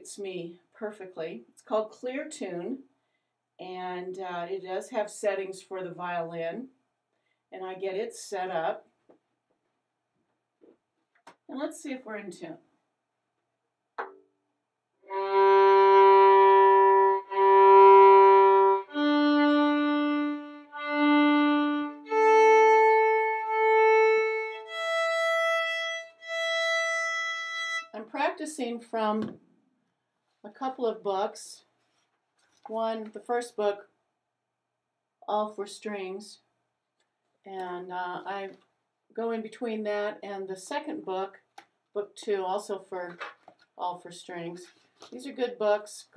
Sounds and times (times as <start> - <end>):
Speech: 0.0 - 2.9, 3.6 - 6.7, 7.6 - 8.8, 11.5 - 12.7, 28.0 - 29.4, 30.4 - 31.7, 32.7 - 33.9, 35.3 - 36.5, 37.5 - 38.6, 39.2 - 43.2, 43.8 - 46.1.